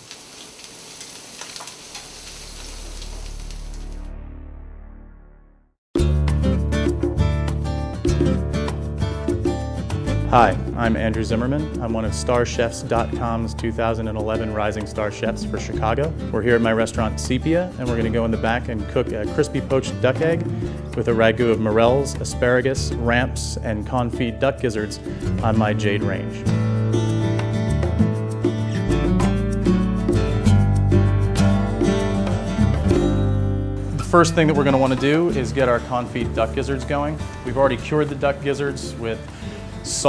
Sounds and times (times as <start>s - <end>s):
Music: 3.2s - 40.0s
Speech: 10.3s - 20.4s, 21.0s - 26.4s, 34.0s - 39.3s, 39.9s - 40.0s.